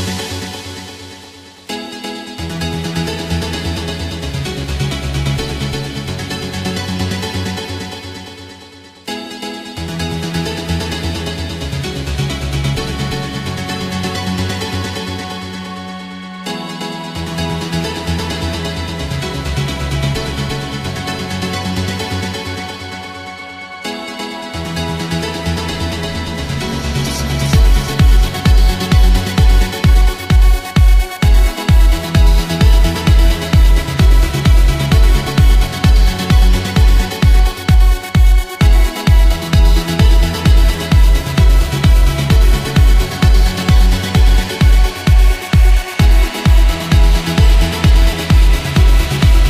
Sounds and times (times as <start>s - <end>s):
Techno: 0.0s - 49.5s.